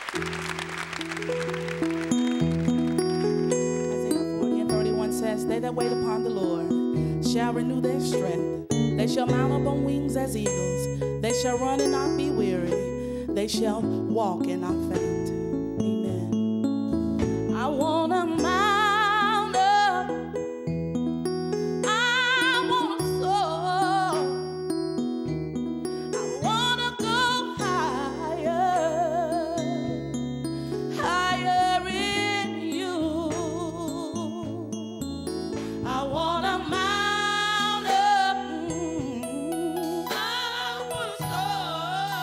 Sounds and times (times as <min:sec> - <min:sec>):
Music: 0:00.0 - 0:42.2
Female singing: 0:04.4 - 0:12.8, 0:13.4 - 0:15.3, 0:17.6 - 0:20.2, 0:21.9 - 0:24.3, 0:26.2 - 0:29.8, 0:31.0 - 0:34.7, 0:35.9 - 0:42.2.